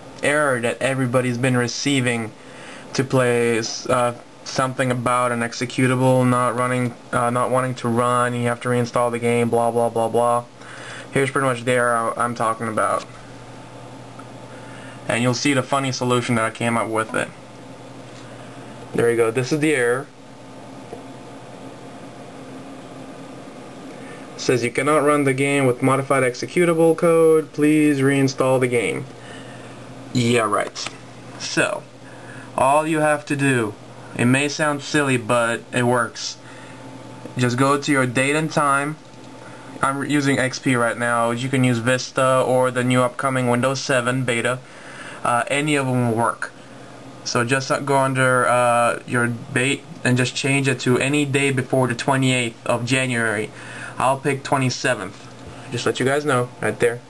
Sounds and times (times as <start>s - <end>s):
Speech: 0.2s - 10.5s, 11.1s - 13.2s, 15.1s - 17.4s, 18.9s - 20.2s, 24.4s - 29.1s, 30.1s - 31.9s, 32.6s - 36.4s, 37.3s - 39.0s, 39.8s - 44.6s, 45.2s - 46.6s, 47.2s - 57.1s.